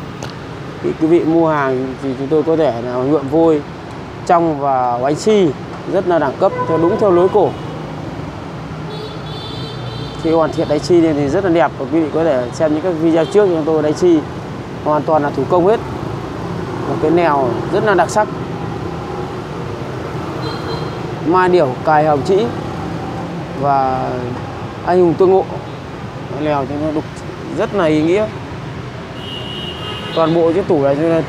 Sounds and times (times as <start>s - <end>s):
Speech: 0.8s - 3.6s, 4.3s - 7.6s, 10.2s - 14.3s, 14.9s - 15.8s, 16.9s - 18.3s, 21.2s - 22.6s, 23.6s - 25.6s, 26.3s - 28.4s, 30.2s - 31.2s.